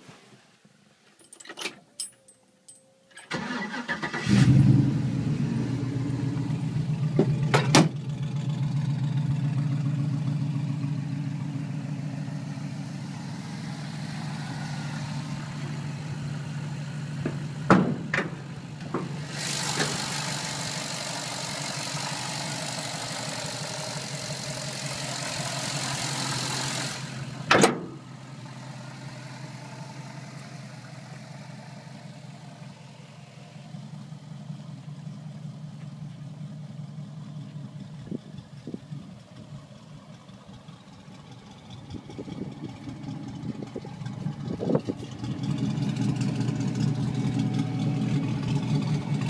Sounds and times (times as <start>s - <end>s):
Vehicle: 0.0s - 49.3s.